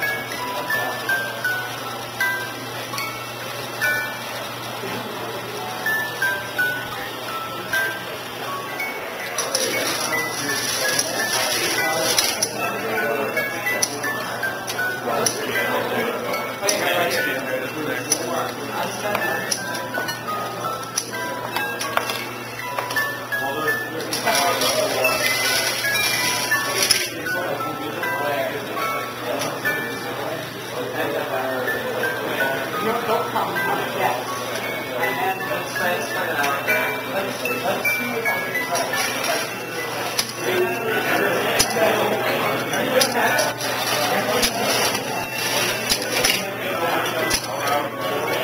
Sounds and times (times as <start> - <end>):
Inside, small room: 0.0 - 48.4
Music: 0.0 - 48.4.